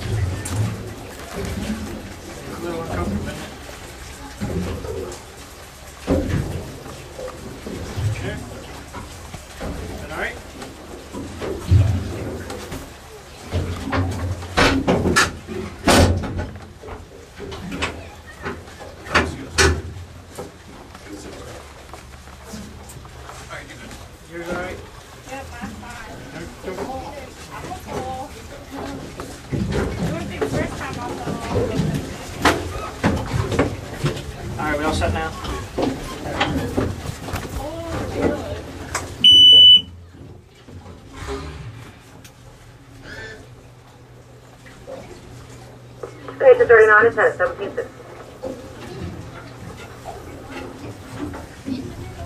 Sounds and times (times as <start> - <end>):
Rowboat, canoe, kayak: 0.0 - 52.2.